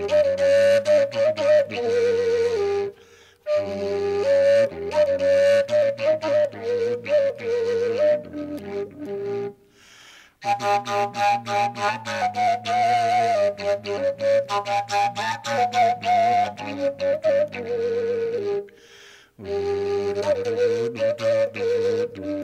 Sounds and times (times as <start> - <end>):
Music: 0.0 - 22.4.